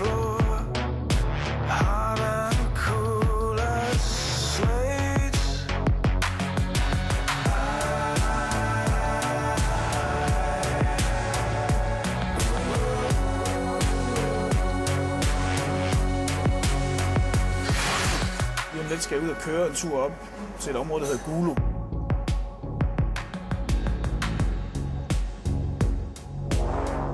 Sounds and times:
Music: 0:00.0 - 0:27.1
Speech: 0:18.7 - 0:21.6.

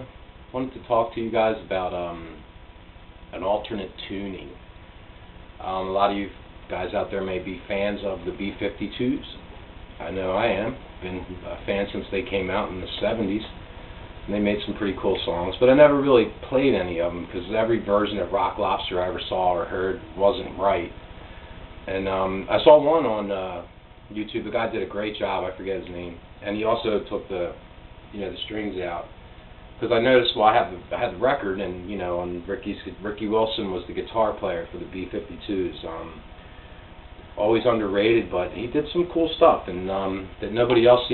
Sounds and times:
Speech: 0:00.0 - 0:02.4, 0:03.3 - 0:04.6, 0:05.6 - 0:13.6, 0:14.3 - 0:21.0, 0:21.9 - 0:29.1, 0:29.8 - 0:36.3, 0:37.4 - 0:41.1.

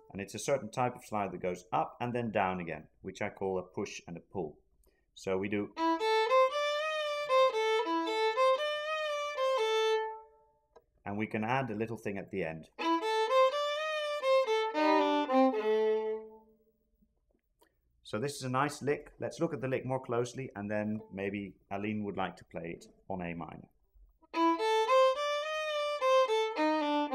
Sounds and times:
Speech: 0:00.1 - 0:04.6, 0:05.2 - 0:05.8, 0:11.0 - 0:12.7, 0:18.1 - 0:23.7
Violin, fiddle: 0:05.7 - 0:10.4, 0:12.8 - 0:16.5, 0:24.3 - 0:27.1.

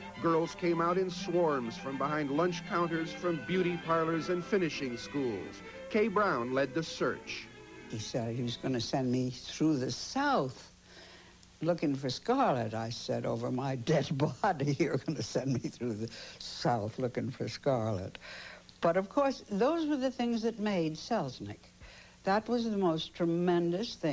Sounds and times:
Music: 0:00.0 - 0:10.8
Speech: 0:00.2 - 0:10.7, 0:11.6 - 0:18.2, 0:18.8 - 0:21.7, 0:22.3 - 0:24.1.

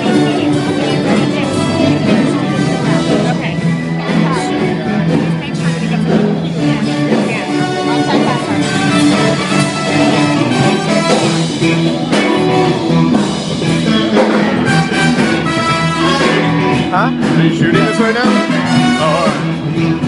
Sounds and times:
Speech: 0:00.0 - 0:12.8, 0:16.2 - 0:19.5
Rock and roll: 0:00.0 - 0:20.0.

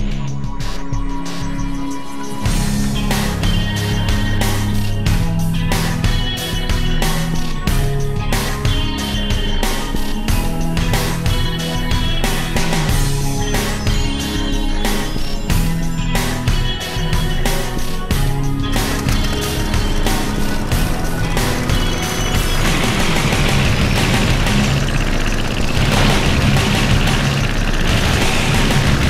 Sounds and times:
Music: 0:00.0 - 0:29.1
Vehicle: 0:18.5 - 0:29.1
Engine starting: 0:21.3 - 0:29.1.

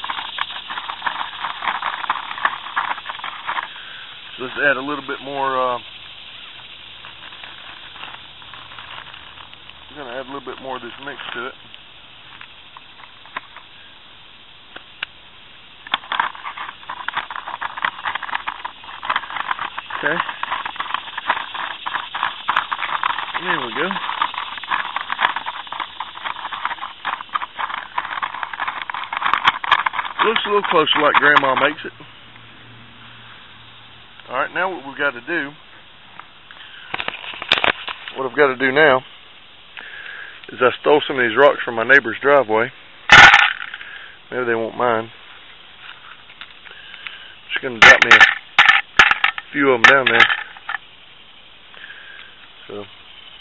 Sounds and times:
Outside, rural or natural: 0:00.0 - 0:53.4
Speech: 0:04.4 - 0:05.8, 0:09.9 - 0:11.6, 0:20.0 - 0:20.3, 0:23.4 - 0:24.0, 0:30.2 - 0:32.0, 0:34.3 - 0:35.6, 0:38.1 - 0:39.0, 0:40.5 - 0:42.7, 0:44.3 - 0:45.1, 0:47.5 - 0:48.2, 0:49.5 - 0:50.3, 0:52.7 - 0:52.9.

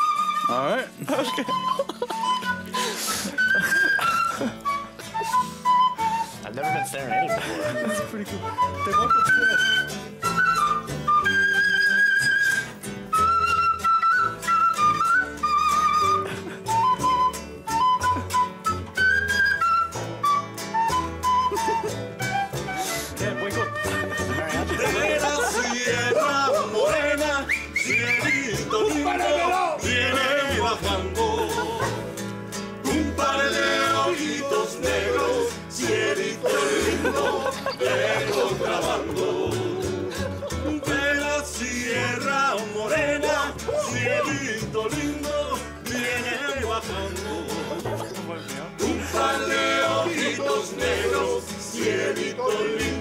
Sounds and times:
Flute: 0:00.0 - 0:30.9, 0:43.3 - 0:44.7
Speech: 0:06.4 - 0:09.5, 0:23.2 - 0:25.7, 0:28.9 - 0:29.8, 0:47.8 - 0:48.8.

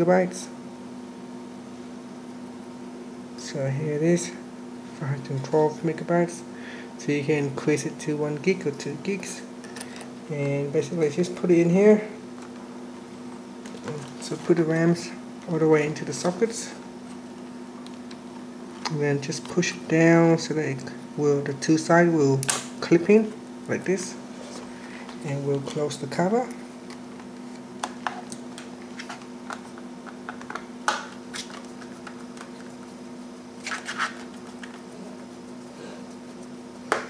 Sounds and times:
Speech: 0:00.0 - 0:00.6, 0:03.4 - 0:09.5, 0:10.3 - 0:12.2, 0:13.8 - 0:16.8, 0:18.9 - 0:24.2, 0:25.2 - 0:26.6.

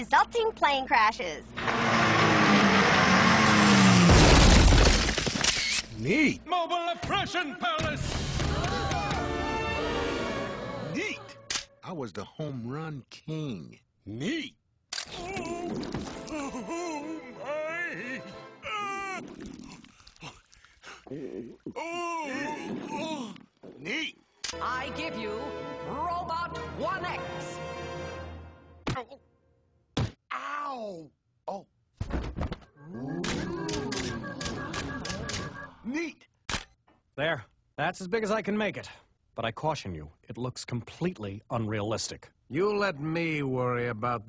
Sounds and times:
Speech: 0:06.0 - 0:08.0, 0:11.0 - 0:14.6, 0:30.3 - 0:31.7, 0:37.2 - 0:44.2
Music: 0:08.0 - 0:11.5, 0:16.0 - 0:18.7, 0:24.5 - 0:28.9.

